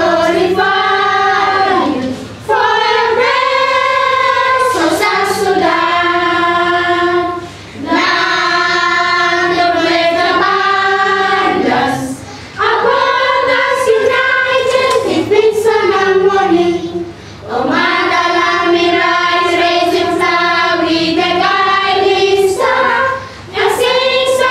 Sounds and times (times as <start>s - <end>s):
Child singing: 0.0s - 24.5s
Choir: 0.0s - 24.5s.